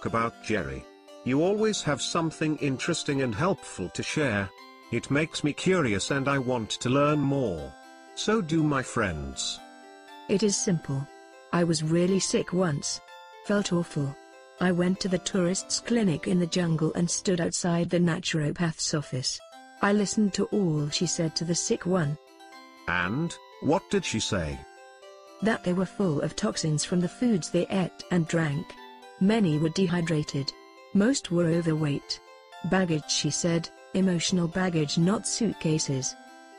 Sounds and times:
Conversation: 0.0 - 36.4
Music: 0.0 - 36.5.

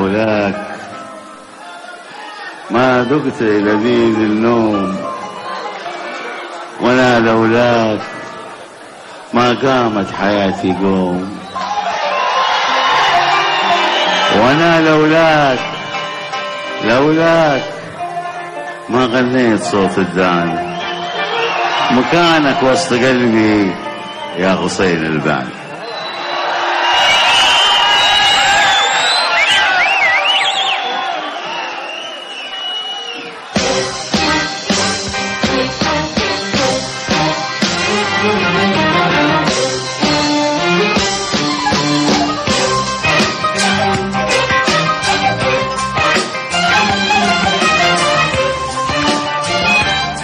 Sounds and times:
Music: 0.0 - 30.2, 32.0 - 50.2
Speech: 9.3 - 11.4, 18.9 - 20.6, 21.9 - 23.8, 24.4 - 25.6.

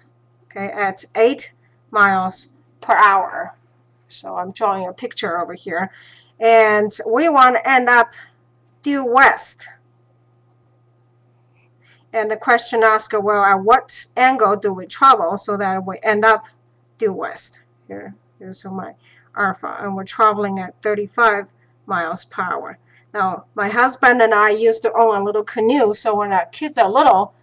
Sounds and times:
Speech: 0.5 - 8.3, 8.9 - 9.8, 12.2 - 16.4, 17.0 - 27.4.

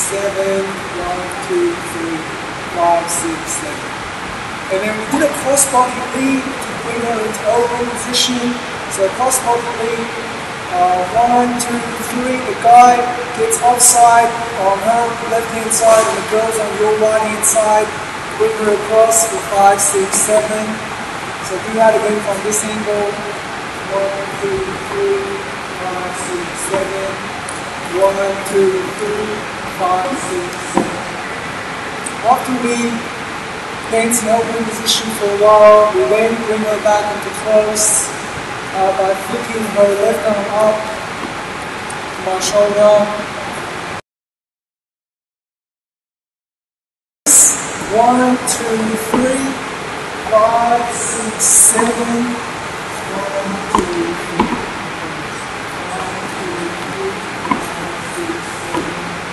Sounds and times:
Speech: 0.0 - 3.9, 4.7 - 20.8, 21.4 - 27.3, 27.9 - 31.1, 32.1 - 33.1, 33.9 - 38.2, 38.8 - 41.0, 42.2 - 43.4, 47.3 - 59.3.

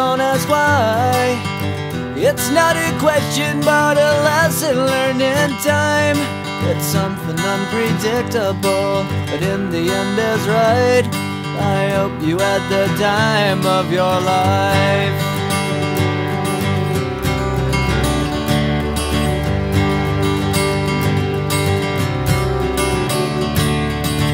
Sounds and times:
Music: 0.0 - 24.3.

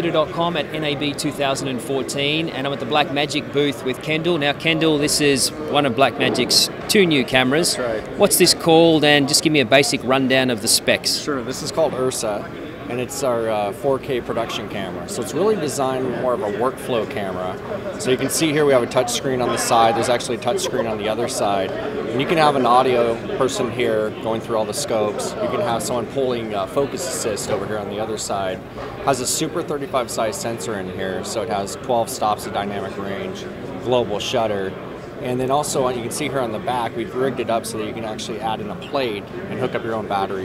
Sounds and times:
Speech: 0.0 - 40.4.

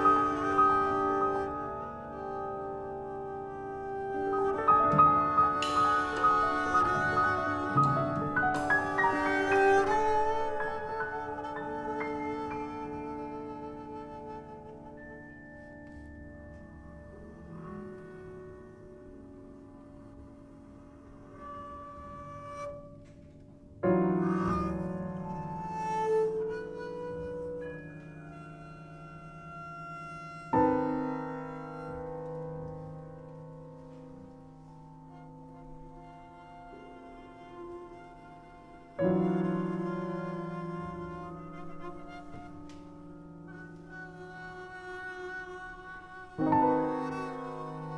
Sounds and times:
Classical music: 0.0 - 47.9
Piano: 0.0 - 47.9.

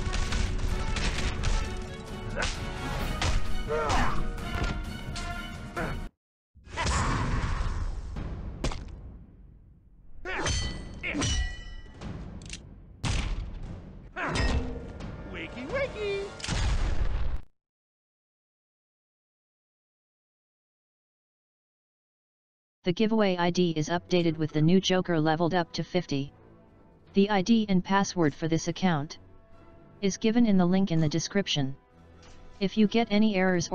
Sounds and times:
Speech: 22.9 - 26.3, 27.2 - 29.2, 30.0 - 31.8, 32.6 - 33.7.

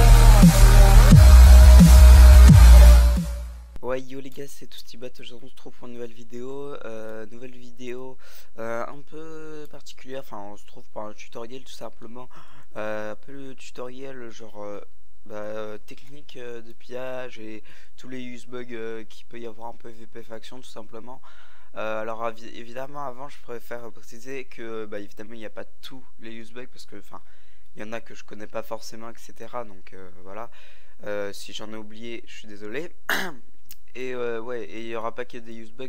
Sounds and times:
Speech: 3.8 - 27.2, 27.8 - 35.8.

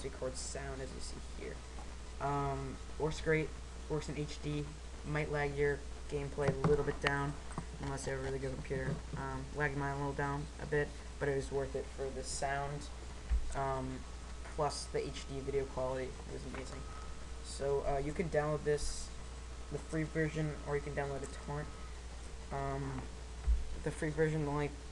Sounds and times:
Speech: 0.0 - 1.6, 2.2 - 21.8, 22.5 - 23.2, 23.8 - 24.8.

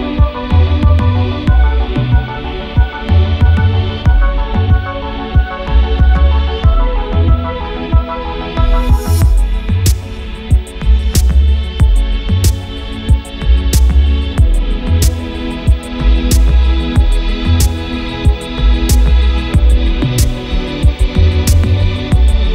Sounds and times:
Music: 0.0 - 22.5.

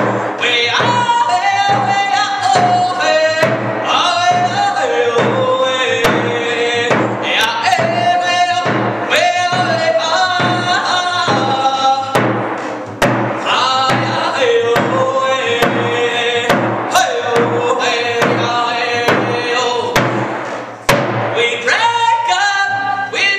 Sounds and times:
Music: 0.0 - 23.3.

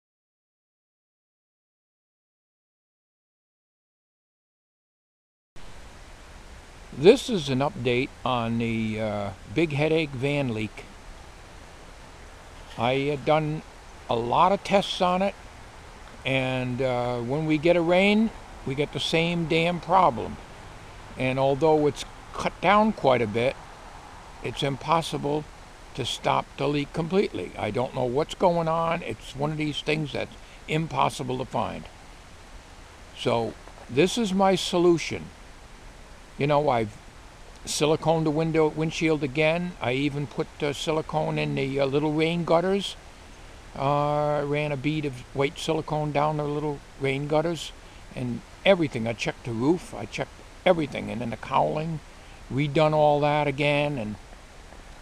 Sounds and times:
Speech: 7.0 - 10.9, 12.7 - 15.4, 16.2 - 20.4, 21.2 - 23.6, 24.5 - 31.9, 33.2 - 35.3, 36.4 - 37.0, 37.7 - 43.0, 43.8 - 54.2.

